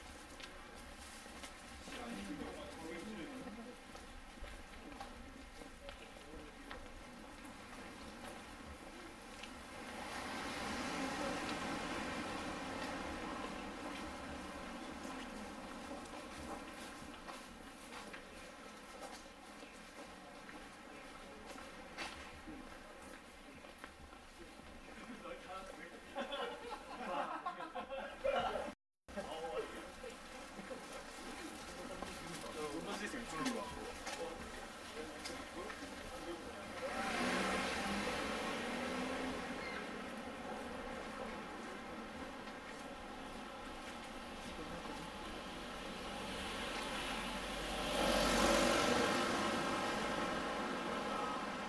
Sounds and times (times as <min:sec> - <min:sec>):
Walk, footsteps: 0:00.0 - 0:09.6, 0:12.7 - 0:26.0, 0:29.7 - 0:36.8, 0:39.6 - 0:45.5
Speech: 0:01.8 - 0:07.5, 0:24.4 - 0:37.4, 0:44.4 - 0:45.5.